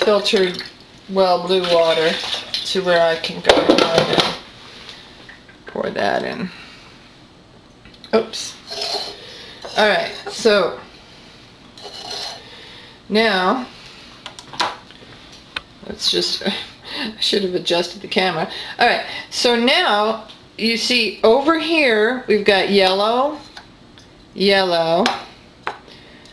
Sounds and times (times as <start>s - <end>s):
Speech: 0.0s - 4.4s, 5.7s - 6.6s, 8.1s - 8.6s, 9.7s - 10.8s, 13.1s - 13.7s, 15.8s - 23.5s, 24.4s - 25.3s.